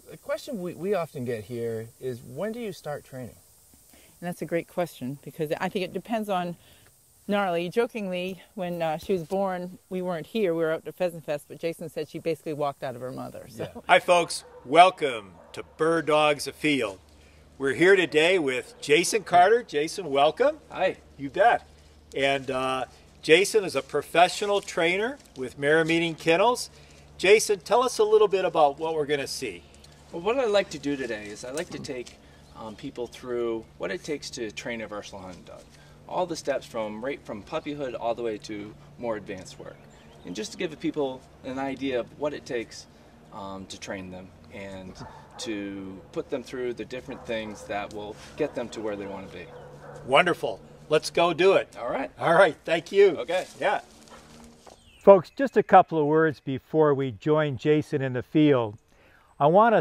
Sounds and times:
Speech: 0:07.3 - 0:17.0, 0:30.2 - 0:42.8, 0:43.4 - 0:49.5, 0:55.1 - 0:58.8, 0:59.4 - 0:59.8.

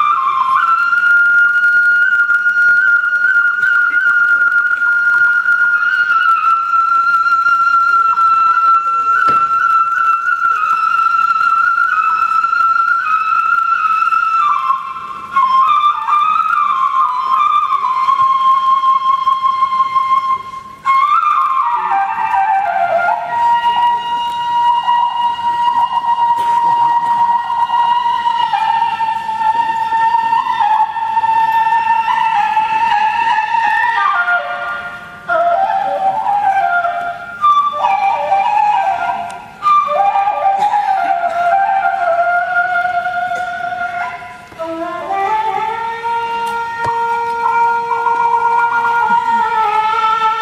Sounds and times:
Inside, large room or hall: 0:00.0 - 0:50.4.

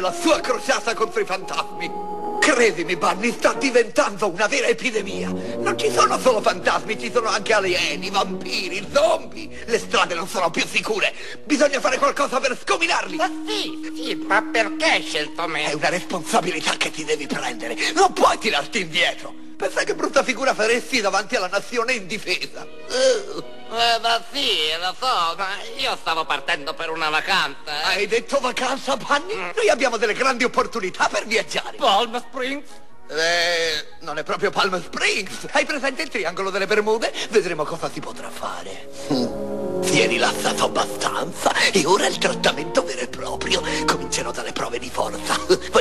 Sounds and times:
Music: 0:00.0 - 0:45.8
Speech: 0:00.0 - 0:45.8.

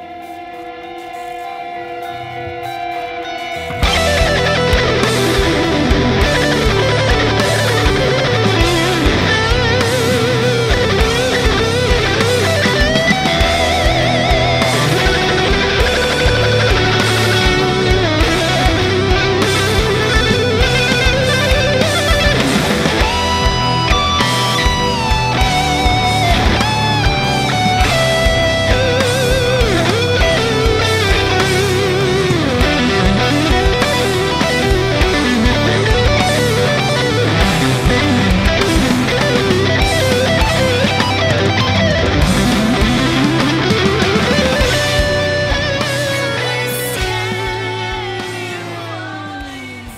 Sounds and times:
Strum: 0:00.0 - 0:49.9.

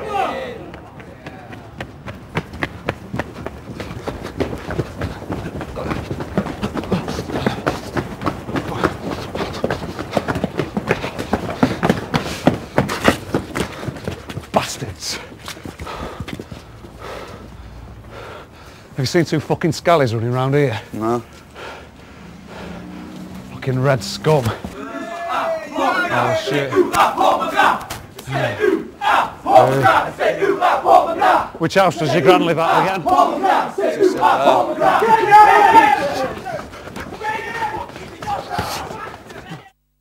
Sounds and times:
Battle cry: 0:00.0 - 0:00.7, 0:24.4 - 0:39.7
Crowd: 0:00.0 - 0:02.8, 0:24.4 - 0:39.7.

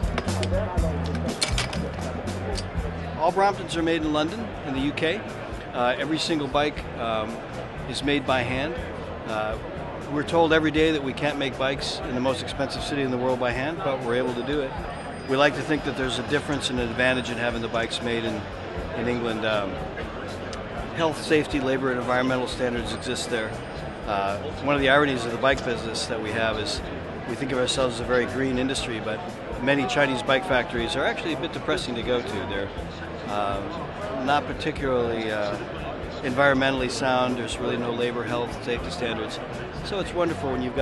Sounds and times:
Music: 0:00.0 - 0:40.8
Speech: 0:03.1 - 0:40.8.

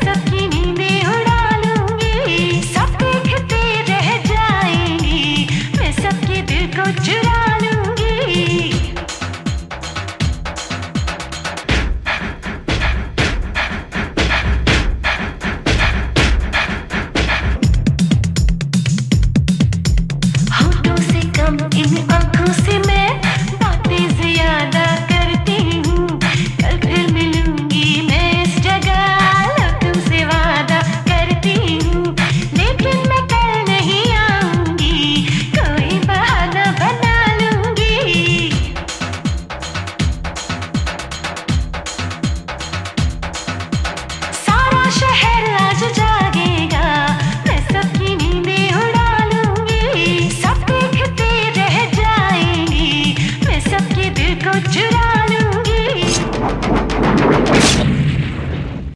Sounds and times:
Music of Bollywood: 0:00.0 - 0:57.9.

